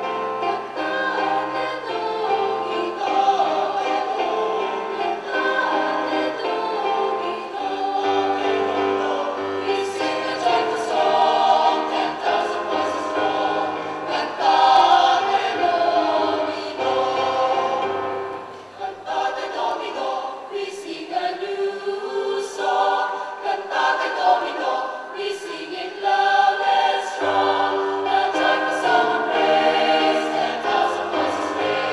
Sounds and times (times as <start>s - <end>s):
A capella: 0.0s - 18.1s, 18.7s - 31.9s
Choir: 0.0s - 31.9s.